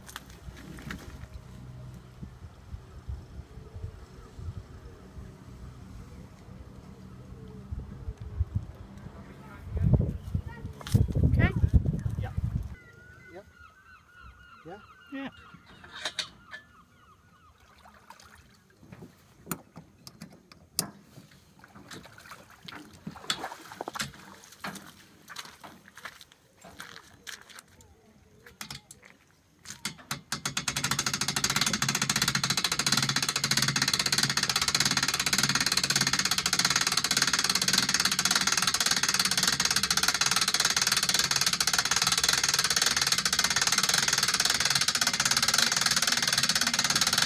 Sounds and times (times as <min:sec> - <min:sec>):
Speech: 0:09.1 - 0:12.4.